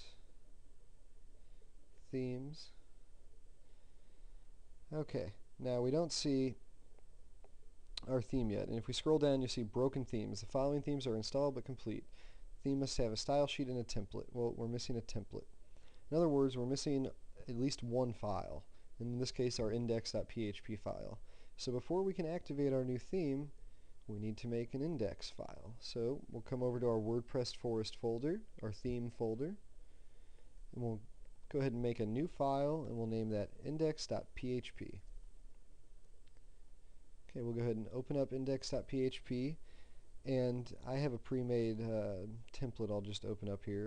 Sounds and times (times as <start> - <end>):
Speech: 0.0 - 0.3, 2.1 - 2.9, 4.9 - 6.6, 8.0 - 15.5, 16.1 - 29.6, 30.7 - 35.1, 37.3 - 39.6, 40.2 - 43.8.